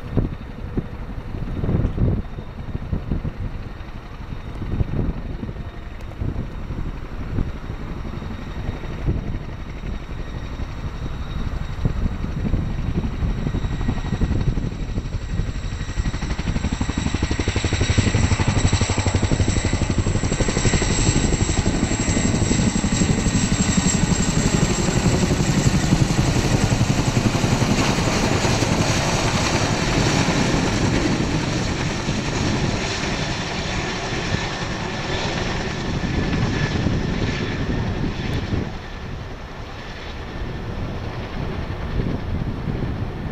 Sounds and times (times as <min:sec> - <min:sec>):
Helicopter: 0:00.0 - 0:43.3.